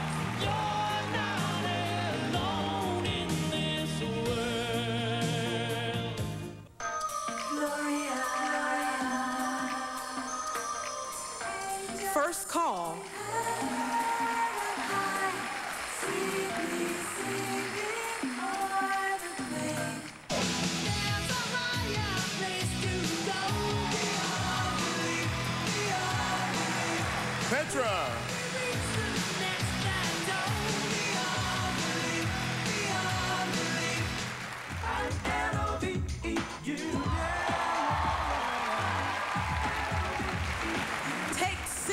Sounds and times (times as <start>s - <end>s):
Music: 0.0s - 41.9s
Speech: 12.1s - 13.1s, 27.5s - 28.2s.